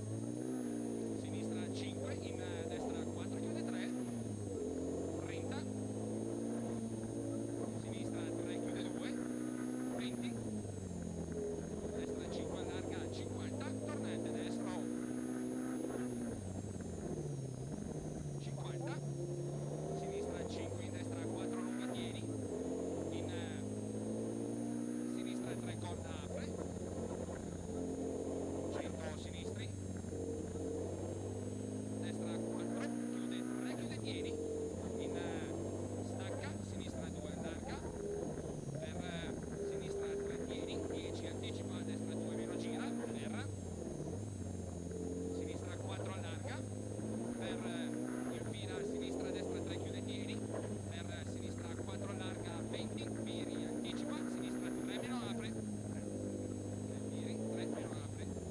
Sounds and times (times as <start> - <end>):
Speech: 0.7 - 4.2, 5.1 - 5.8, 6.5 - 10.5, 11.8 - 16.3, 18.4 - 19.1, 19.9 - 23.8, 25.0 - 27.1, 28.3 - 29.8, 32.0 - 38.1, 38.7 - 43.6, 45.3 - 56.2, 56.8 - 58.5.